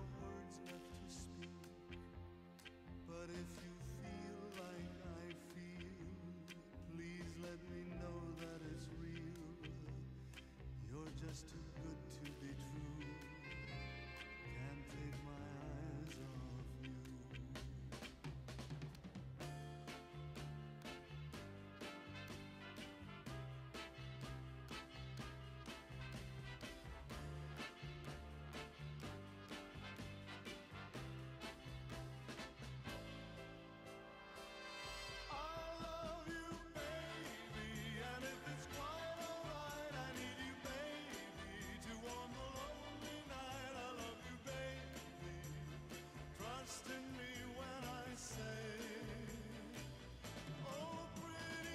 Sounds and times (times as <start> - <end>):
Synthesizer: 0.0 - 51.7.